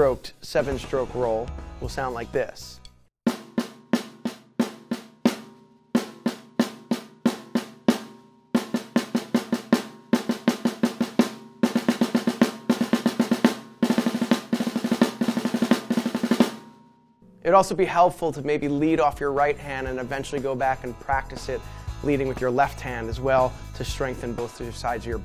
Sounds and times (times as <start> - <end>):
Speech: 0.0 - 2.8, 17.5 - 25.2
Drum roll: 3.3 - 20.3.